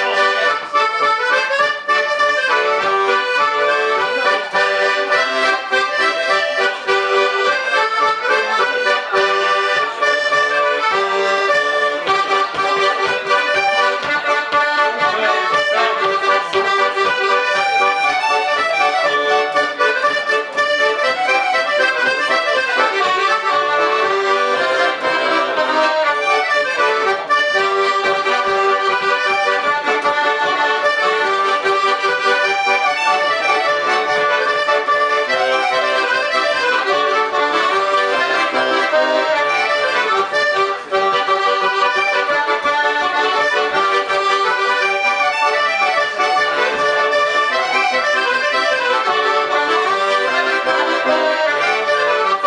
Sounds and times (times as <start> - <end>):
Accordion: 0.0 - 52.4.